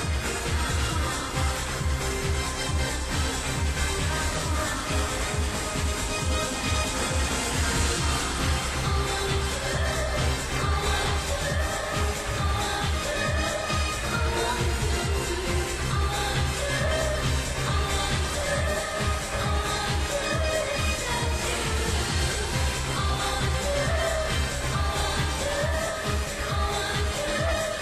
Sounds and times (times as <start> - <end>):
Pop music: 0.0 - 27.8.